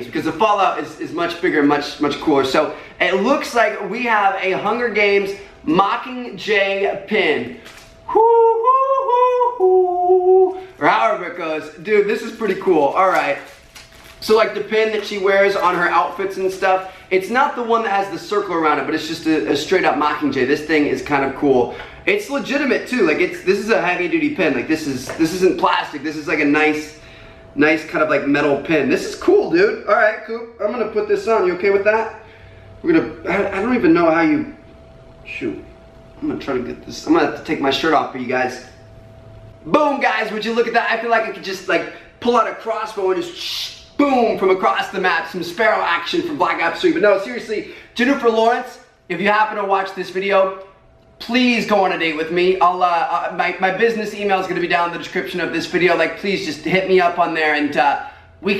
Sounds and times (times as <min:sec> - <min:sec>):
Speech: 0:00.0 - 0:13.6, 0:14.2 - 0:27.0, 0:27.6 - 0:32.2, 0:32.8 - 0:34.6, 0:35.3 - 0:38.8, 0:39.7 - 0:58.5.